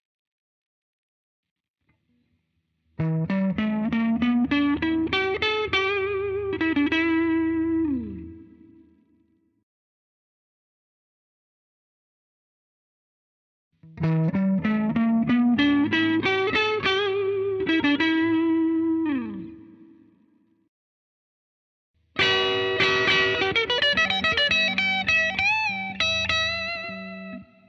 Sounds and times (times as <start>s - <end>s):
Music: 2.2s - 9.6s, 13.9s - 20.7s, 22.2s - 27.6s.